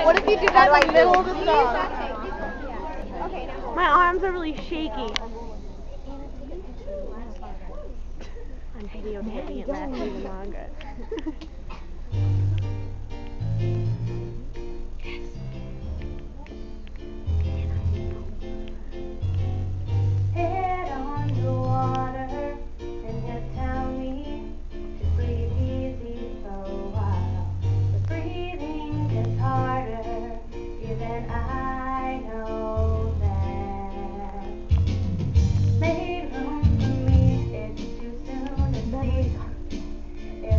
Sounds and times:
Music: 12.1 - 40.5
Female singing: 20.4 - 24.5, 25.1 - 27.5, 28.1 - 34.6, 35.8 - 39.6.

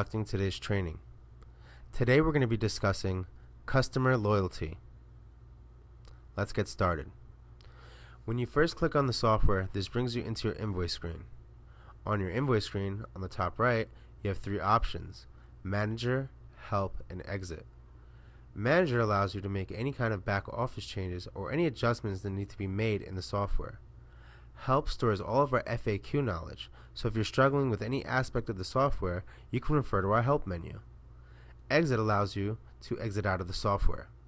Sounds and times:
Speech: 0.0 - 1.0, 1.9 - 4.8, 6.4 - 7.2, 8.3 - 11.3, 12.0 - 17.7, 18.6 - 23.8, 24.6 - 30.9, 31.7 - 34.2.

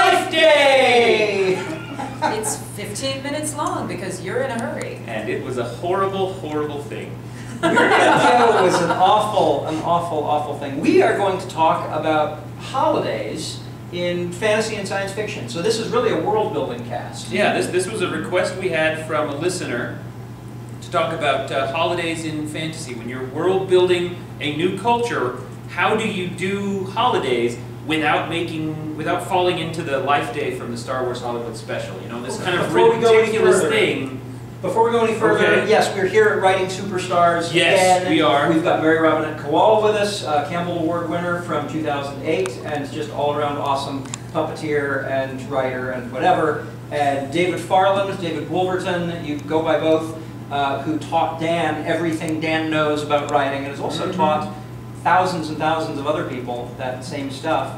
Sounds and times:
Speech: 0.0 - 7.2, 8.0 - 20.0, 20.8 - 57.7.

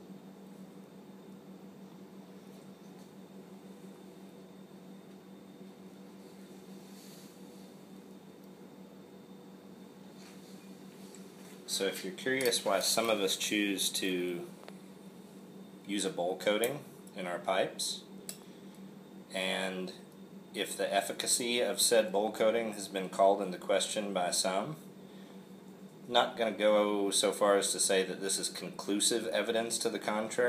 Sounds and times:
Speech: 11.7 - 14.6, 15.9 - 18.1, 19.3 - 20.0, 20.6 - 24.8, 26.1 - 30.4.

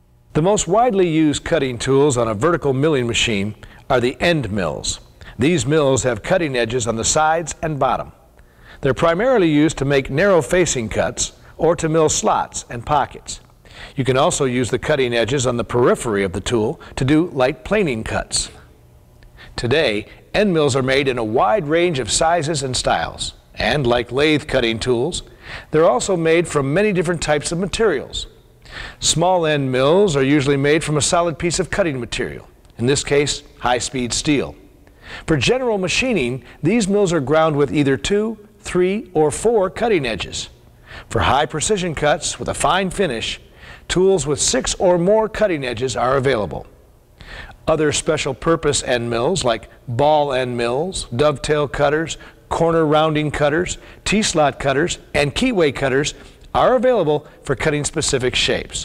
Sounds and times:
Speech: 0.3 - 8.2, 8.8 - 18.7, 19.6 - 28.4, 29.0 - 34.7, 35.3 - 46.7, 47.6 - 58.8.

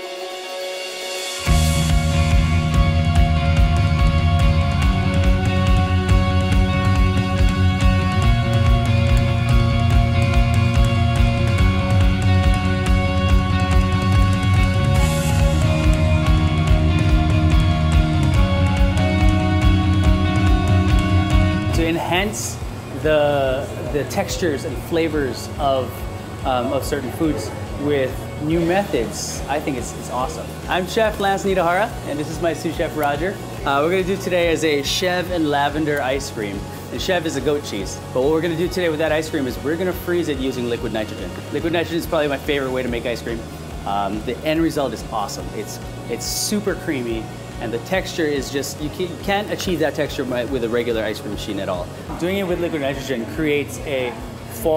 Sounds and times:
Music: 0.0 - 54.7
Speech: 21.8 - 54.7.

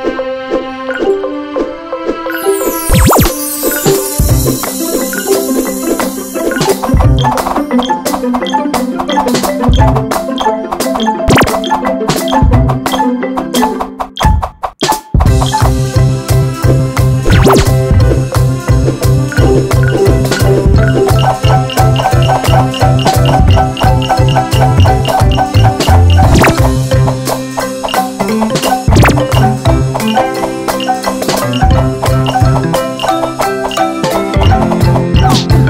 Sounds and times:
Percussion: 2.3 - 35.7.

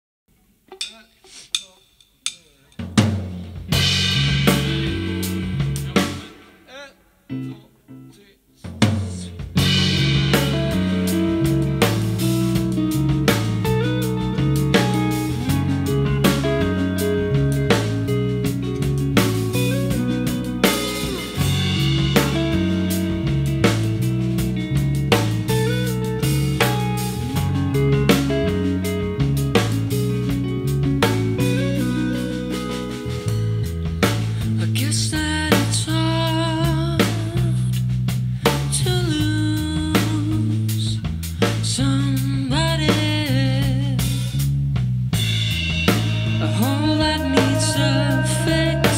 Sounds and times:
Drum kit: 0.6 - 7.8, 8.6 - 48.9
Bass drum: 2.8 - 6.3, 8.8 - 48.9.

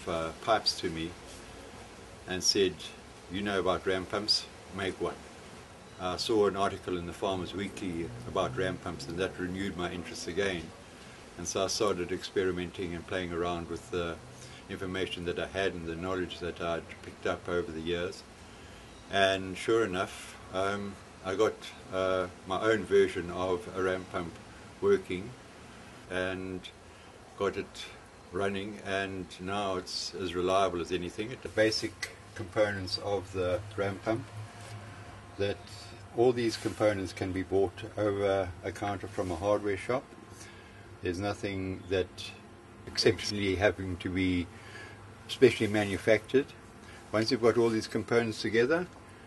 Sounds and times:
Speech: 0.0 - 1.2, 2.3 - 5.2, 6.0 - 10.8, 11.4 - 18.3, 19.1 - 25.4, 26.1 - 26.8, 27.4 - 34.3, 35.4 - 40.1, 41.0 - 44.5, 45.3 - 49.0.

